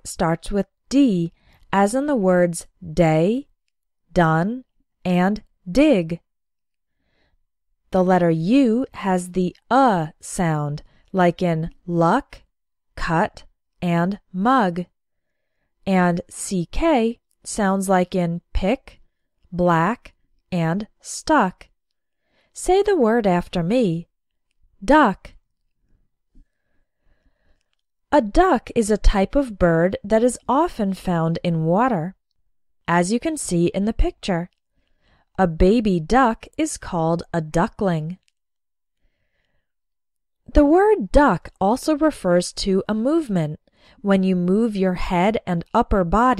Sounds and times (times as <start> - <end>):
Speech: 0.0 - 3.5, 4.1 - 6.2, 8.0 - 12.4, 13.0 - 14.9, 15.9 - 19.0, 19.6 - 21.7, 22.6 - 24.1, 24.8 - 25.4, 28.2 - 32.2, 32.9 - 34.5, 35.4 - 38.2, 40.5 - 46.3.